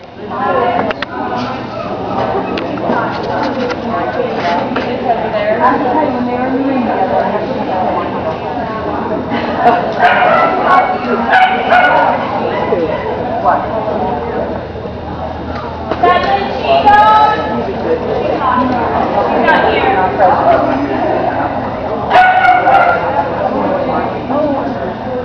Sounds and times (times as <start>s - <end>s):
Speech: 0.0s - 25.2s
Bow-wow: 10.0s - 12.8s, 22.1s - 23.2s.